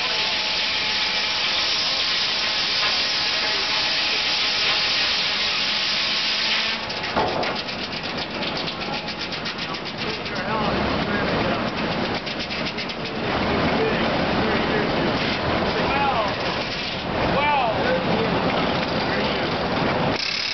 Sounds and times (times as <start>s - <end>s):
Wood: 0.0s - 13.8s
Speech: 10.0s - 11.7s, 13.7s - 16.4s, 17.3s - 19.7s.